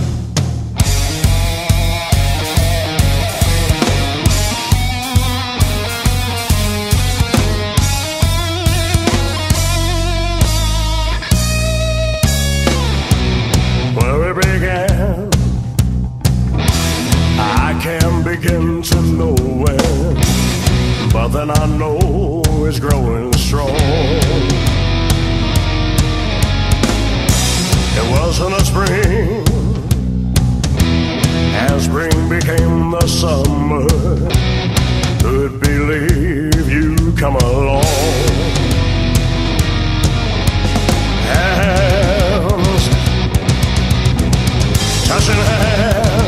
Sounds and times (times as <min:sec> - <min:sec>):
Music: 0:00.0 - 0:46.2.